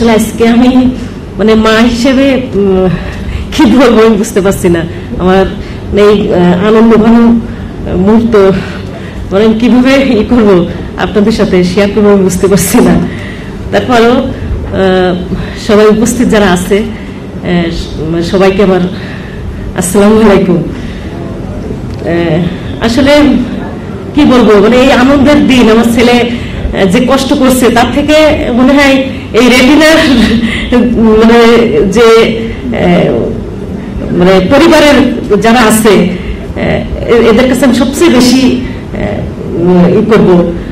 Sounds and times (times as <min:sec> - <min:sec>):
Female speech, woman speaking: 0:00.0 - 0:13.1, 0:13.7 - 0:19.0, 0:19.8 - 0:20.8, 0:22.0 - 0:33.4, 0:34.0 - 0:40.6
Narration, monologue: 0:00.0 - 0:40.7.